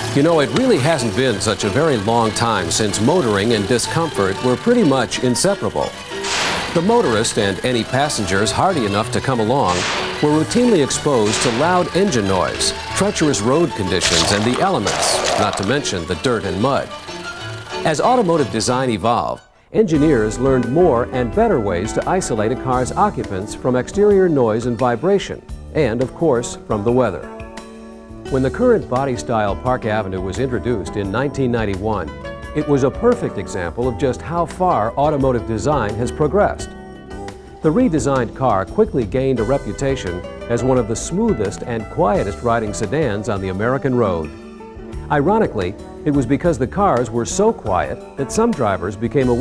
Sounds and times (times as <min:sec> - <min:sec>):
Music: 0:00.0 - 0:49.4
Speech: 0:00.2 - 0:05.9, 0:06.8 - 0:16.9, 0:17.8 - 0:27.3, 0:28.3 - 0:36.7, 0:37.7 - 0:44.3, 0:45.1 - 0:49.4.